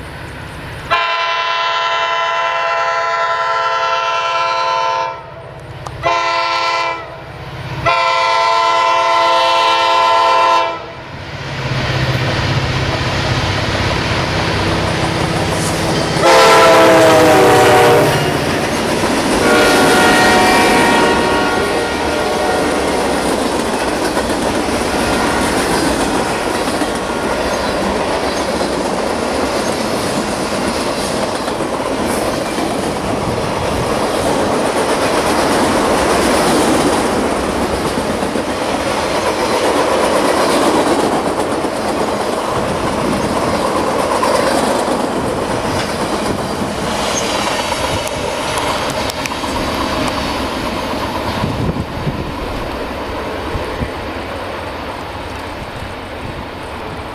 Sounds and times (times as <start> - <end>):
Train: 0.0 - 57.1.